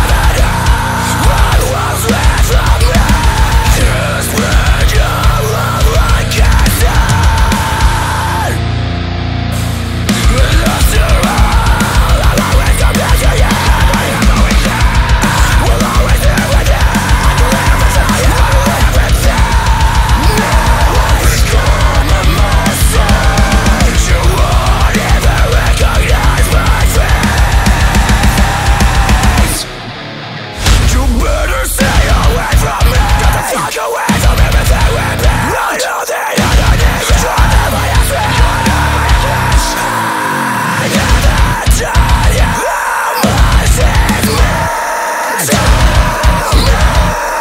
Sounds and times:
Blues: 0.0s - 47.4s.

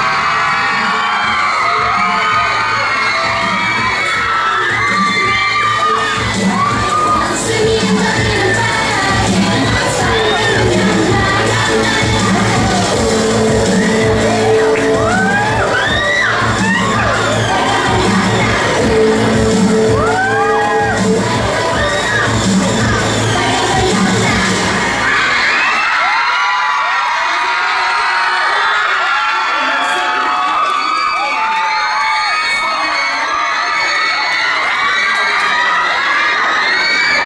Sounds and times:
Inside, public space: 0.0s - 37.2s
Speech: 29.5s - 31.4s.

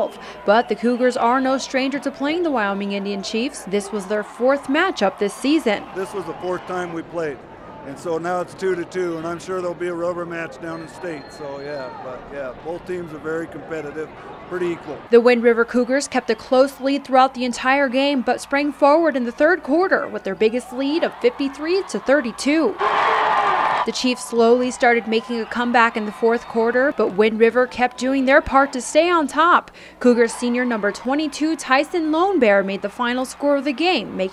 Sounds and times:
Speech: 0.5s - 22.7s.

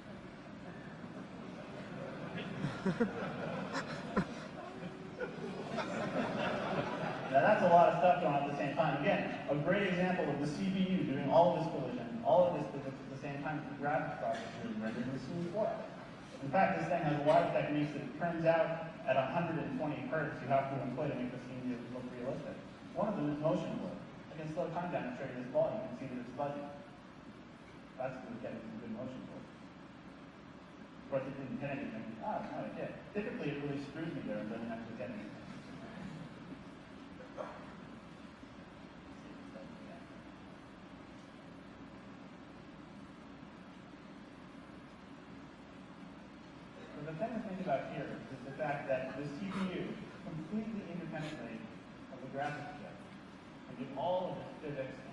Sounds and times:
Speech: 7.3s - 26.9s, 28.0s - 29.5s, 31.1s - 36.2s, 46.8s - 55.1s.

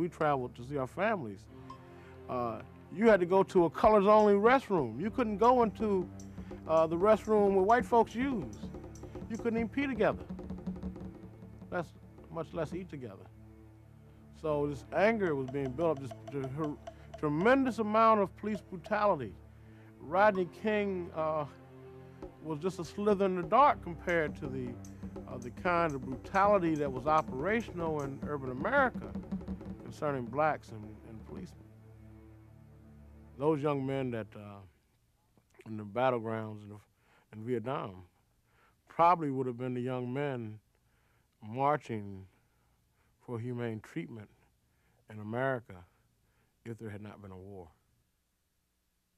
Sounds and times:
Speech: 0.0s - 1.4s, 2.3s - 6.1s, 6.7s - 8.7s, 9.3s - 10.3s, 11.7s - 13.3s, 14.4s - 19.4s, 20.0s - 21.6s, 22.4s - 29.2s, 29.8s - 31.6s, 33.4s - 34.8s, 35.5s - 38.1s, 38.9s - 40.6s, 41.4s - 42.4s, 43.2s - 44.4s, 45.1s - 45.9s, 46.6s - 47.8s
Music: 0.0s - 36.5s.

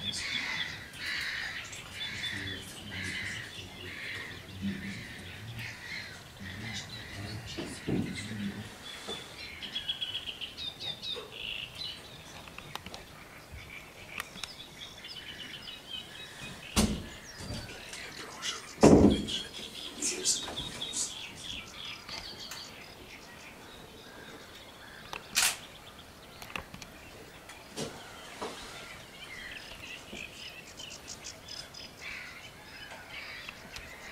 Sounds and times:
Chirp, tweet: 0.0s - 34.1s.

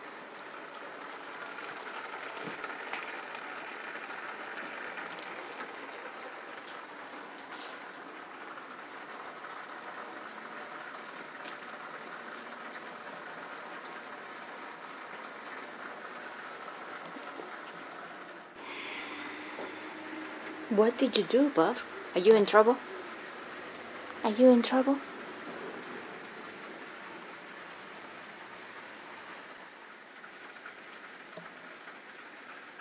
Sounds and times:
Speech: 20.7s - 22.8s, 24.2s - 25.0s.

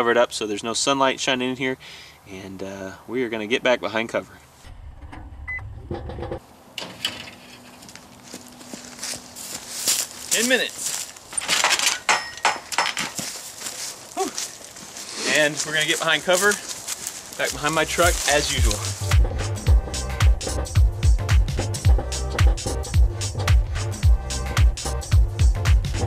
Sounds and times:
Speech: 0.0s - 4.4s, 10.3s - 10.8s, 15.2s - 16.7s, 17.4s - 18.9s.

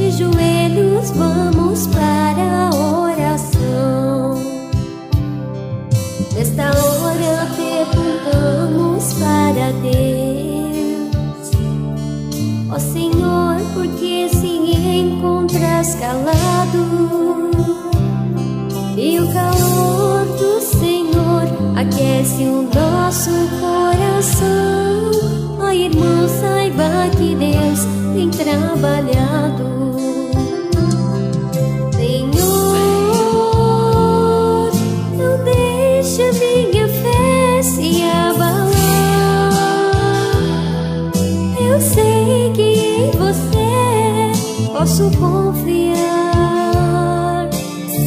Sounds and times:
Christmas music: 0.0s - 46.3s.

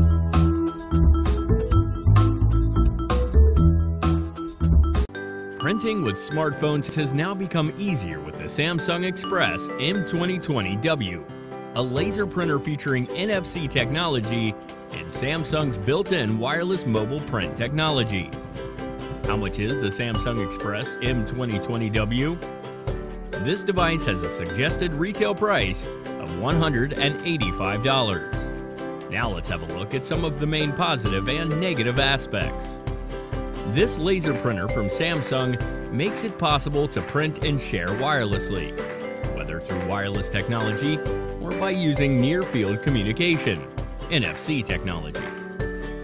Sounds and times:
Music: 0.0s - 46.0s
Speech: 5.6s - 11.2s, 11.8s - 18.4s, 19.3s - 22.4s, 23.4s - 28.5s, 29.1s - 32.8s, 33.7s - 38.8s, 39.4s - 45.4s.

